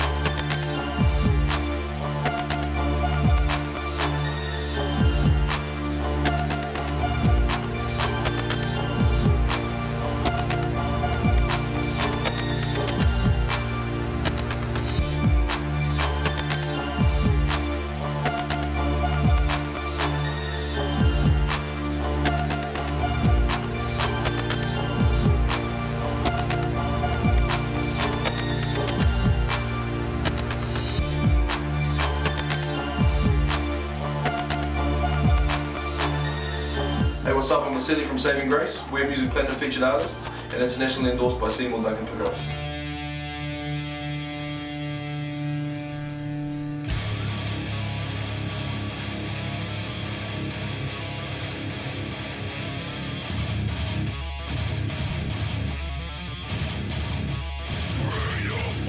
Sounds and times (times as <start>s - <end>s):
Soundtrack music: 0.0s - 58.8s.